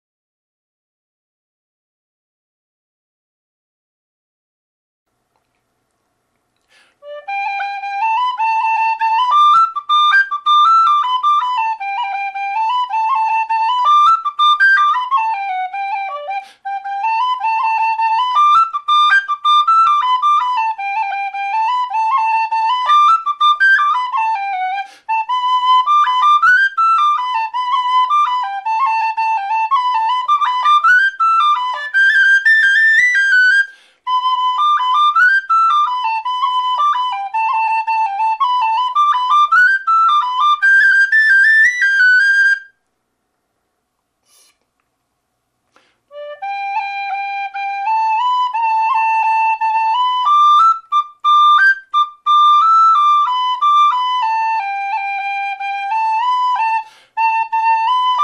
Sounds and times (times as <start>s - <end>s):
Flute: 6.8s - 42.8s, 45.8s - 58.2s.